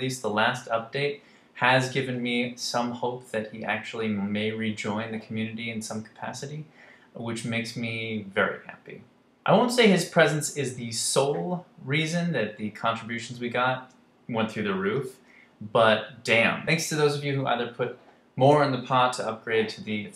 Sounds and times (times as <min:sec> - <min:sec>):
Speech: 0:00.0 - 0:20.1.